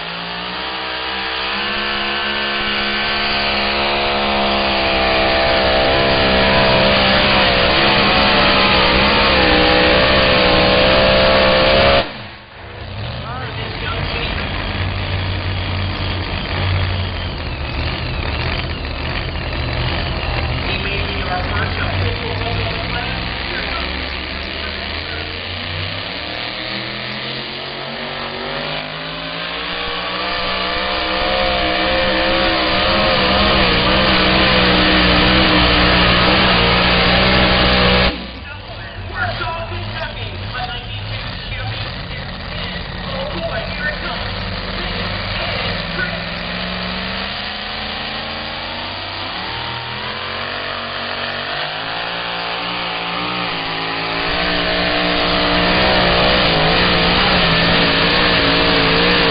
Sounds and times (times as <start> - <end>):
Truck: 0.0 - 59.3.